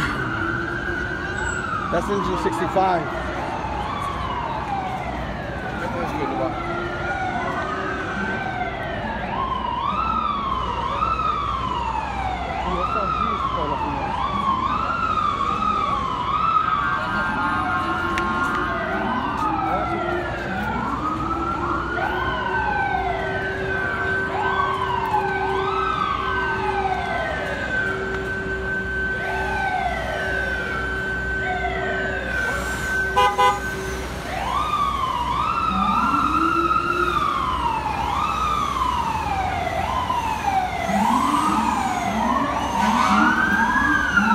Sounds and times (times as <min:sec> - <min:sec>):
Ambulance (siren): 0:00.0 - 0:44.3.